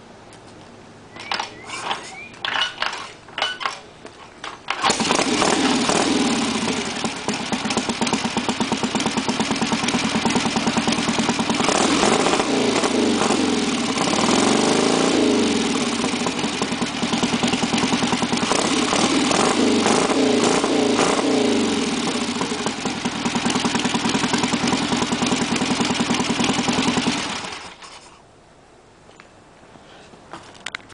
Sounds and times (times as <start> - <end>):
Vehicle: 0.0 - 30.9
Accelerating, revving, vroom: 4.8 - 6.8, 11.6 - 16.0, 18.4 - 22.3.